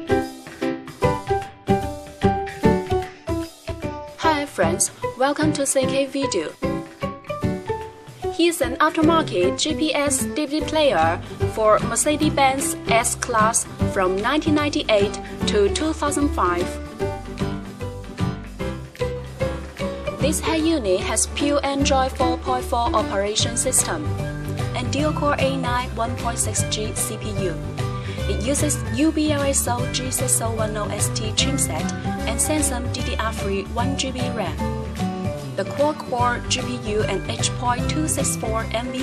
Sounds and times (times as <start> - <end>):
Music: 0.0 - 39.0
Speech: 4.2 - 6.6, 8.4 - 16.8, 20.2 - 24.1, 24.8 - 27.6, 28.2 - 34.6, 35.6 - 39.0.